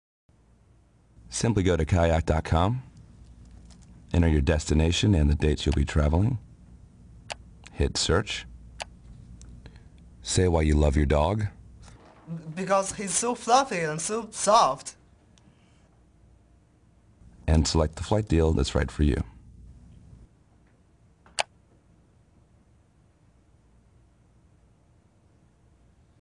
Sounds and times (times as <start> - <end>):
Speech: 1.3 - 2.9, 4.1 - 6.4, 7.7 - 8.5, 10.2 - 11.6, 12.3 - 15.0, 17.4 - 19.4.